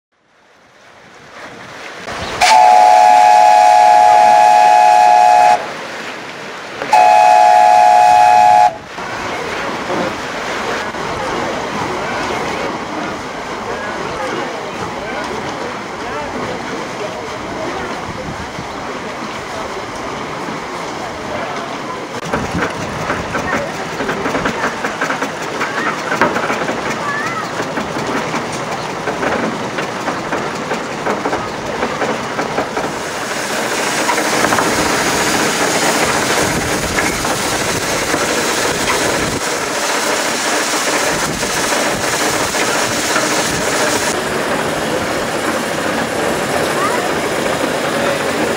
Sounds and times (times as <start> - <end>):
Steam whistle: 2.4 - 5.7, 6.9 - 8.8.